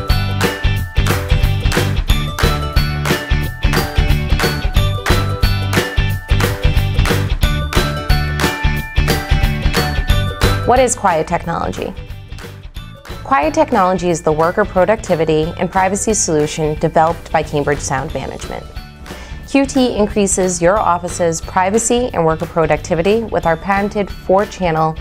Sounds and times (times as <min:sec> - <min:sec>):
Music: 0:00.0 - 0:25.0
Speech: 0:10.7 - 0:12.0, 0:13.3 - 0:18.7, 0:19.5 - 0:25.0.